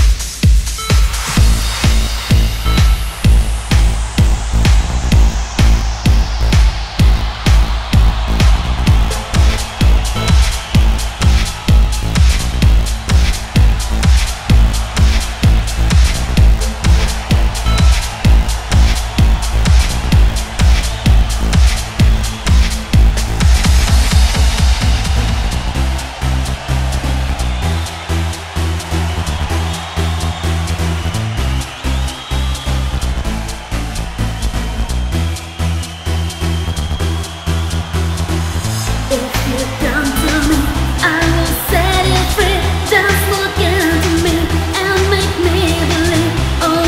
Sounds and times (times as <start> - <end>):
Music: 0.0 - 46.8.